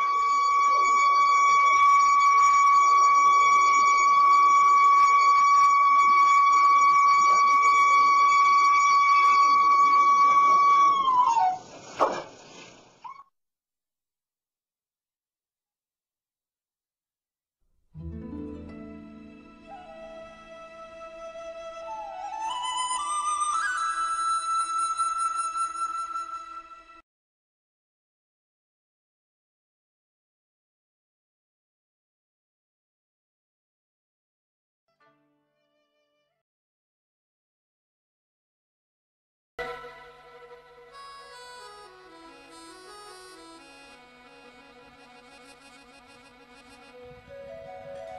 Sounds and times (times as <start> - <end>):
Music: 0.0 - 11.3, 18.0 - 27.0, 34.9 - 36.4, 39.6 - 48.1.